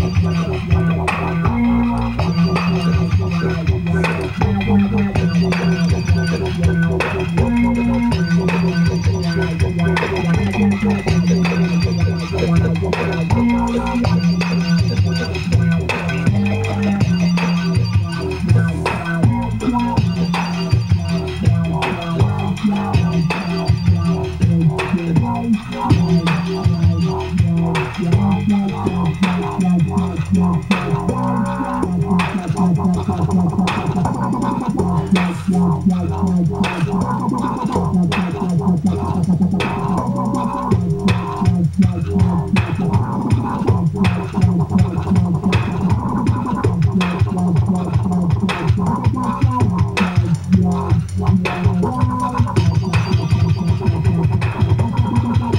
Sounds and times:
Music: 0.0 - 55.5
Sound effect: 0.0 - 55.5.

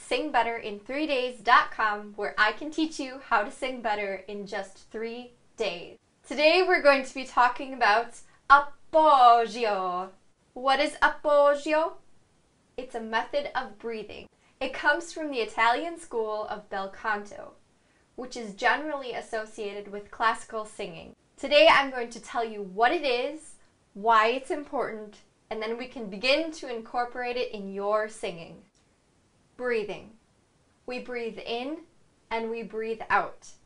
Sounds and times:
Speech: 0.0 - 12.0, 12.8 - 17.6, 18.2 - 28.7, 29.6 - 30.2, 30.9 - 33.6.

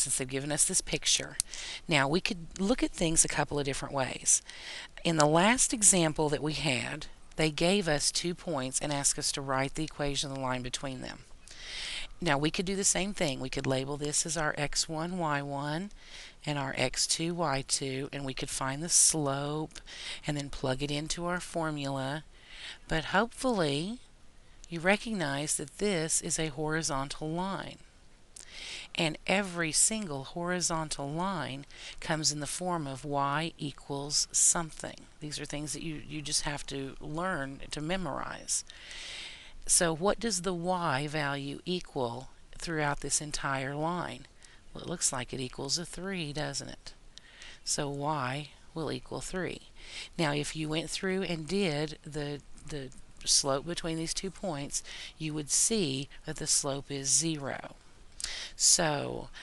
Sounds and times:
Speech: 0.0 - 4.4, 5.0 - 11.2, 12.2 - 22.3, 22.9 - 24.0, 24.7 - 27.8, 28.9 - 38.6, 39.7 - 47.0, 47.6 - 57.8, 58.6 - 59.4.

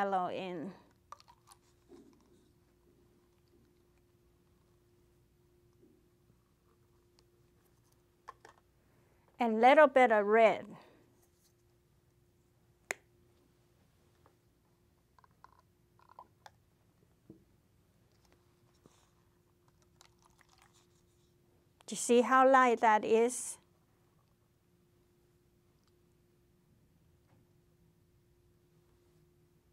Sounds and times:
Speech: 0.0 - 0.8, 9.4 - 10.8, 21.9 - 23.6.

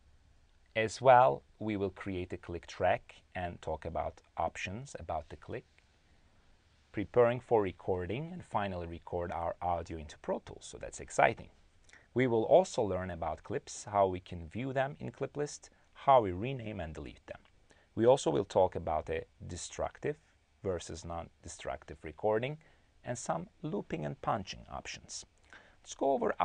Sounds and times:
Speech: 0.8 - 5.7, 6.9 - 26.4.

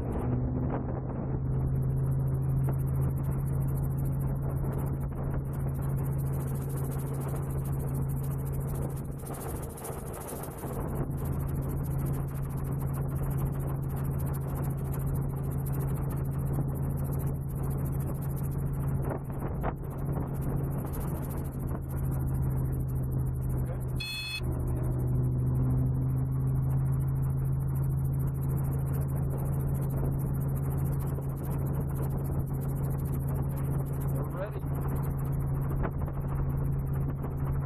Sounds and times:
Helicopter: 0.0 - 37.6.

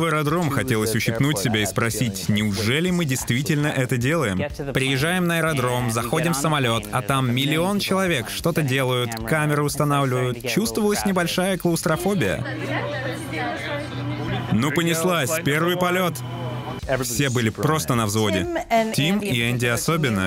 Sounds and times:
Speech: 0.0 - 20.2.

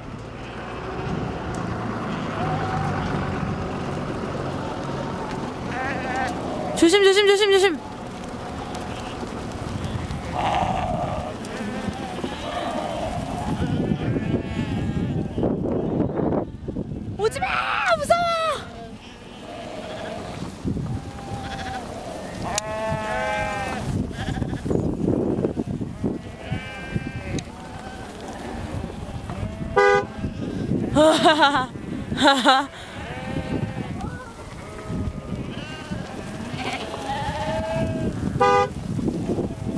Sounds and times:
Bleat: 5.7 - 6.4, 10.2 - 16.0, 18.8 - 20.4, 21.0 - 24.8, 26.2 - 38.1
Speech: 6.8 - 7.8, 17.2 - 18.8.

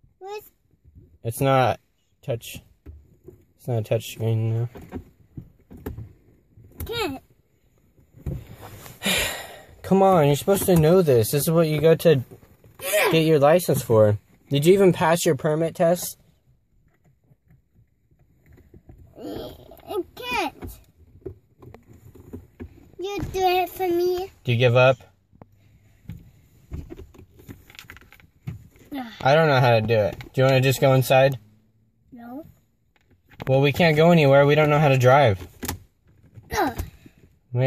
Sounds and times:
Child speech, kid speaking: 0.2 - 0.5, 6.8 - 7.2, 19.2 - 20.8, 23.0 - 24.4, 28.9 - 29.4, 32.1 - 32.6, 36.5 - 36.9.

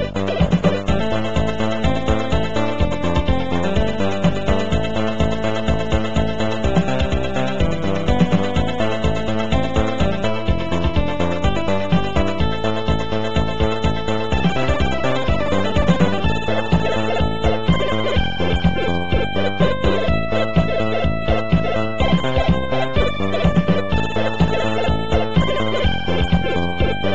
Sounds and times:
Exciting music: 0.0 - 27.1
Soundtrack music: 0.0 - 27.1
Video game music: 0.0 - 27.1.

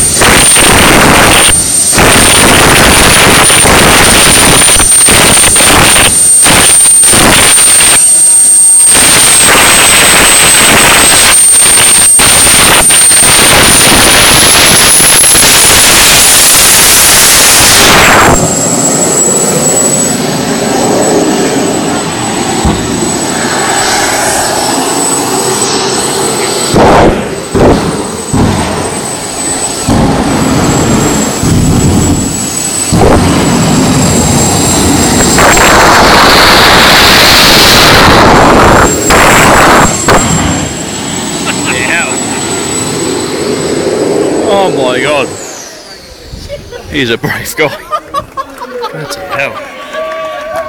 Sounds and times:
Fixed-wing aircraft, airplane: 0.0 - 46.3
Jet engine: 0.0 - 48.4.

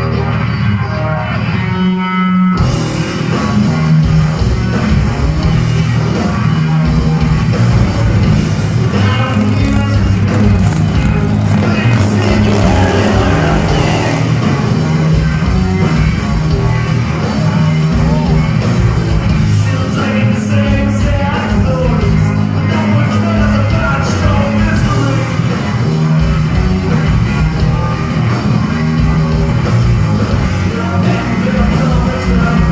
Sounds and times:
Music: 0.0 - 32.7
Motorcycle: 2.6 - 32.7.

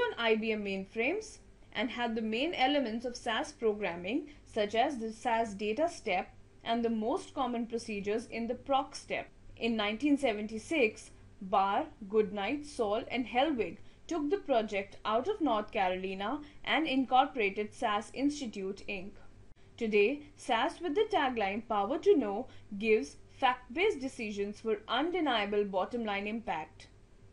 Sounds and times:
Speech: 0.0 - 27.0.

